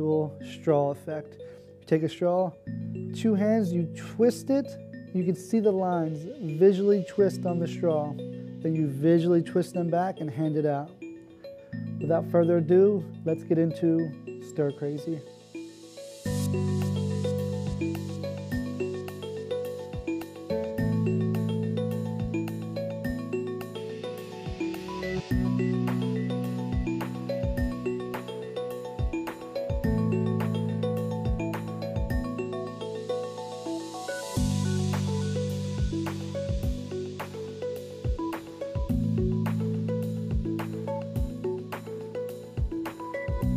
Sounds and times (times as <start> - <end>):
Speech: 0.0 - 2.6, 3.2 - 11.0, 12.0 - 15.3
Music: 0.0 - 43.5.